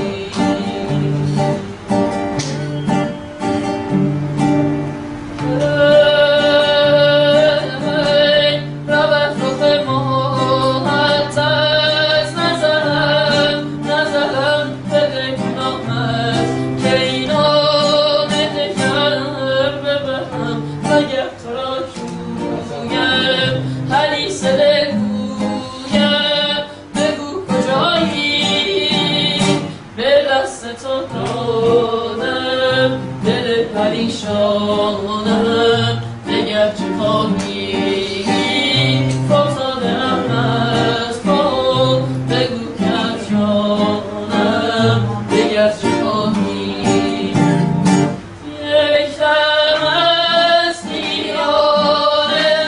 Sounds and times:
Music: 0.0 - 52.6
Female singing: 5.4 - 47.7, 48.4 - 52.6.

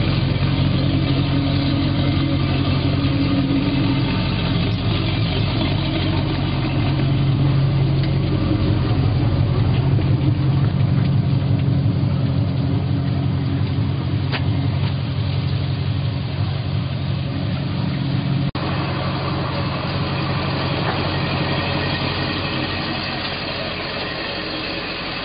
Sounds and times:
Motorboat, speedboat: 0.0 - 25.2.

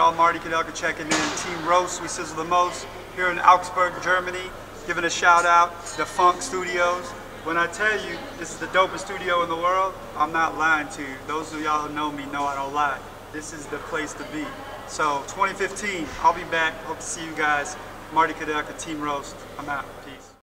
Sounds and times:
Speech: 0.0 - 20.4.

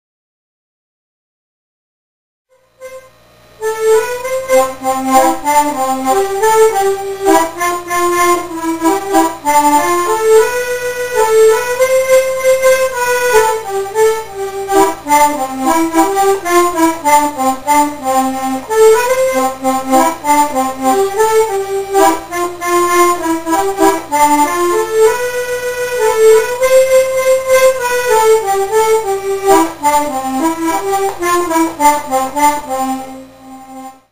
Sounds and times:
Music: 2.5 - 34.1.

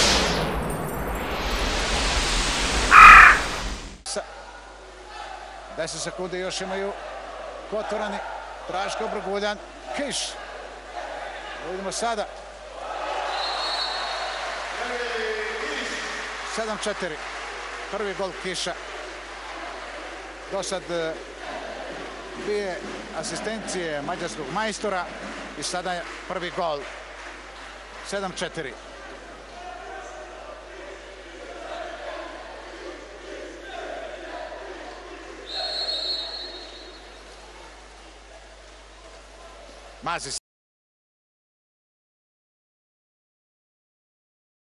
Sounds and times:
Speech: 4.1 - 7.0, 7.7 - 12.4, 14.8 - 17.2, 17.9 - 18.8, 20.5 - 21.2, 22.4 - 26.9, 28.0 - 32.5, 37.5 - 40.4.

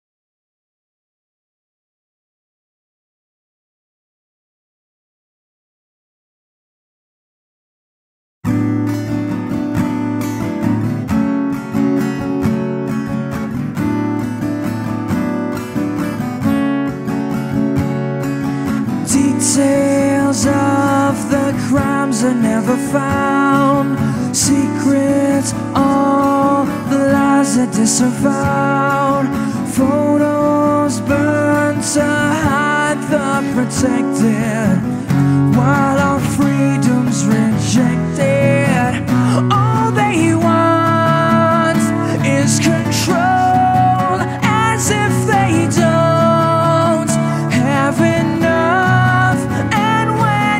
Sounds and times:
Music: 8.5 - 50.5.

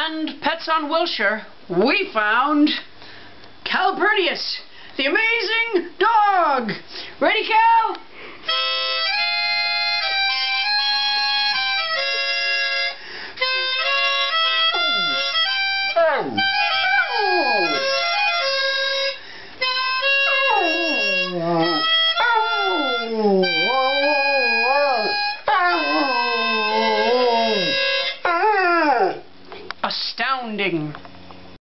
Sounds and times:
Speech: 0.0 - 2.9, 3.6 - 8.0, 29.8 - 31.0
Music: 8.5 - 28.2.

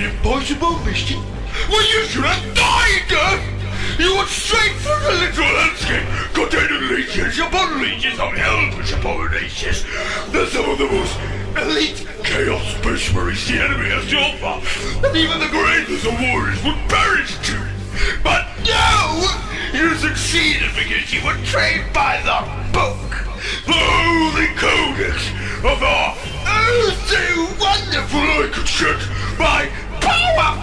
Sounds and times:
Music: 0.0 - 30.6
Speech synthesizer: 0.0 - 30.6.

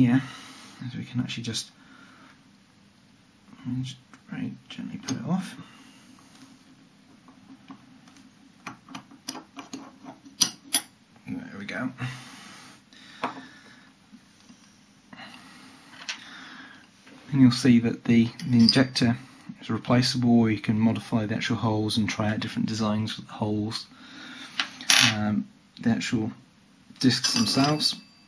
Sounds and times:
Speech: 0.0 - 1.8, 3.6 - 5.6, 11.2 - 12.2, 17.3 - 23.9, 25.0 - 26.4, 27.0 - 28.0.

